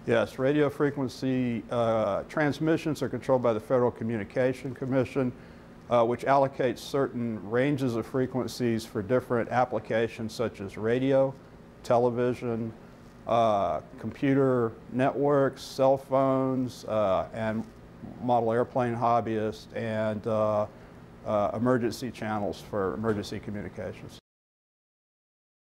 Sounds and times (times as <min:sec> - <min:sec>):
Speech: 0:00.0 - 0:24.2.